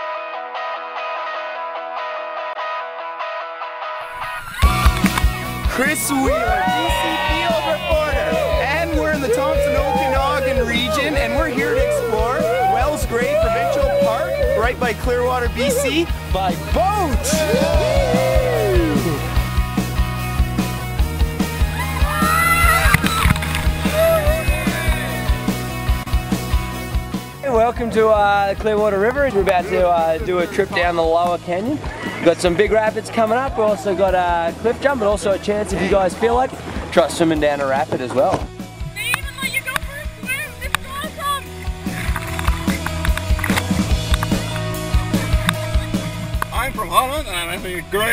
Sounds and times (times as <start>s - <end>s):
Music: 0.0s - 48.1s.